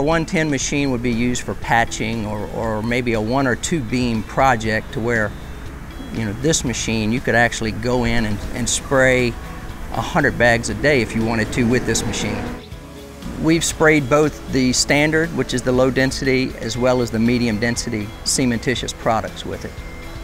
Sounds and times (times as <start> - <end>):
Speech: 0.0 - 5.3, 6.0 - 9.4, 10.0 - 12.7, 13.3 - 19.7
Music: 0.0 - 20.2.